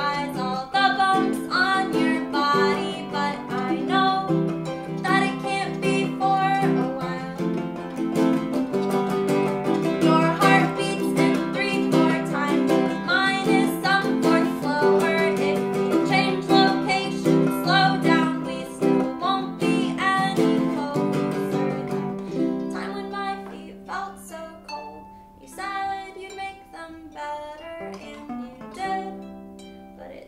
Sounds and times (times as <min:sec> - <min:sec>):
Bowed string instrument: 0:00.0 - 0:30.2
Guitar: 0:00.0 - 0:30.2
Ukulele: 0:00.0 - 0:30.2.